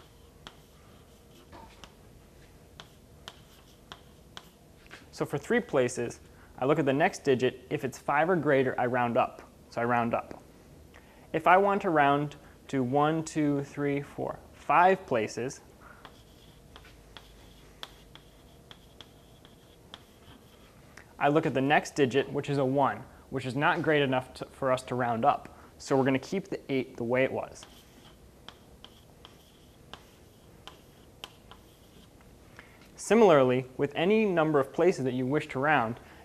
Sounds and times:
Writing: 0.0 - 4.6, 16.0 - 20.8, 27.4 - 32.2
Speech: 5.1 - 10.4, 11.3 - 15.7, 21.2 - 27.8, 33.0 - 36.0.

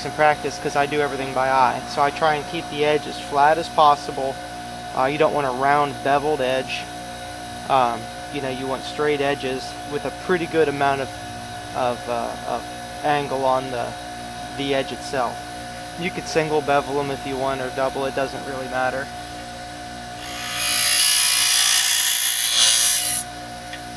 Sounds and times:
Speech: 0.0 - 4.4, 5.0 - 6.9, 7.7 - 11.1, 11.8 - 14.0, 14.6 - 15.4, 16.0 - 19.1.

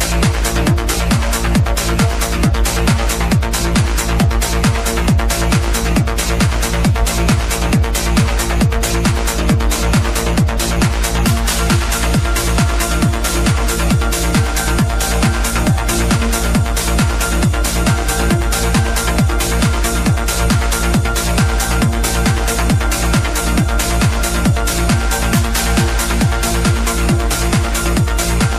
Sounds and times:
Music: 0.0 - 28.5.

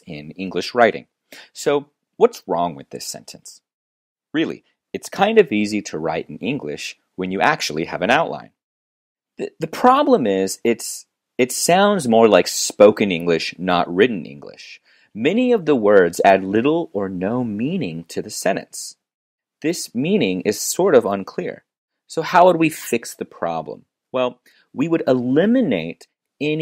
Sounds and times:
Speech: 0.0 - 3.7, 4.4 - 8.6, 9.4 - 19.0, 19.6 - 26.6.

